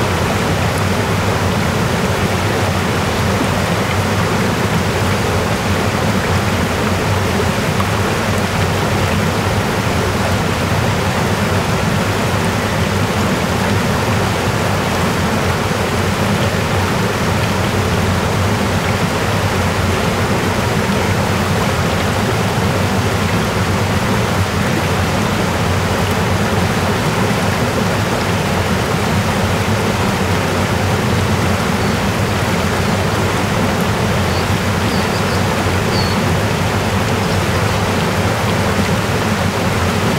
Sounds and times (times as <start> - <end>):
Stream: 0.0 - 40.1.